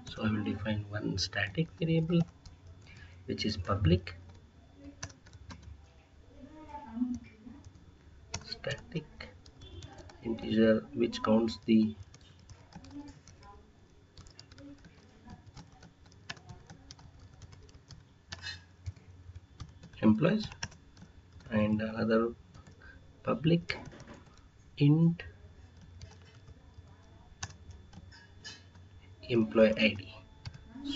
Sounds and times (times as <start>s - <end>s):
Speech: 0.0s - 2.3s, 3.3s - 4.2s, 8.4s - 13.8s, 20.0s - 20.6s, 23.2s - 23.8s, 29.2s - 30.9s.